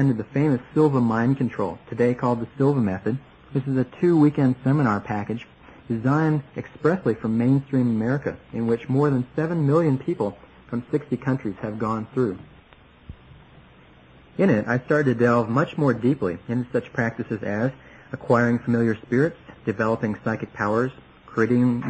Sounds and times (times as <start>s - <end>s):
Speech: 0.0s - 12.6s, 14.4s - 21.9s.